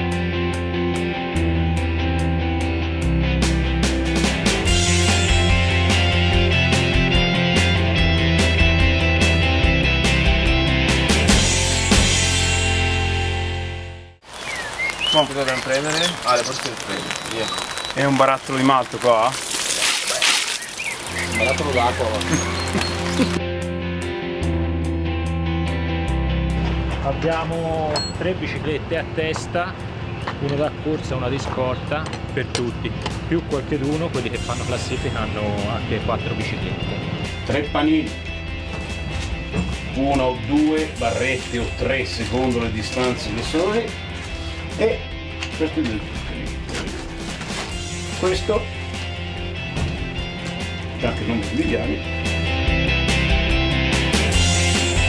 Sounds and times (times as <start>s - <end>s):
Music: 0.0s - 14.2s, 21.0s - 55.0s
Speech: 15.1s - 19.4s, 21.4s - 22.4s, 27.0s - 29.8s, 30.4s - 36.8s, 37.5s - 38.1s, 40.0s - 44.0s, 45.6s - 46.1s, 48.2s - 48.7s, 51.0s - 52.0s.